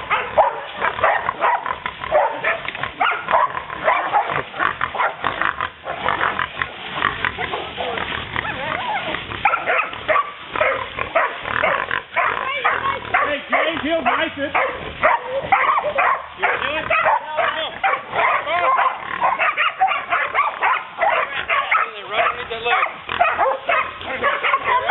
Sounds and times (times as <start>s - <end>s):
Dog: 0.0s - 6.2s, 7.4s - 24.9s
Pig: 0.0s - 24.9s.